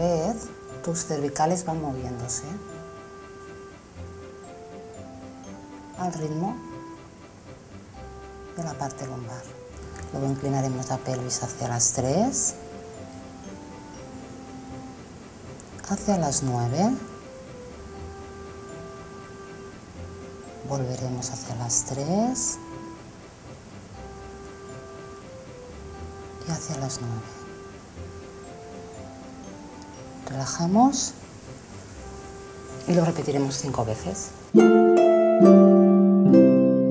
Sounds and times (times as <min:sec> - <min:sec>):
Speech: 0:00.0 - 0:02.6, 0:06.0 - 0:06.6, 0:08.6 - 0:09.5, 0:10.1 - 0:12.6, 0:15.8 - 0:17.1, 0:20.6 - 0:22.6, 0:26.4 - 0:27.4, 0:30.3 - 0:31.2, 0:32.8 - 0:34.4
Music: 0:00.0 - 0:36.9.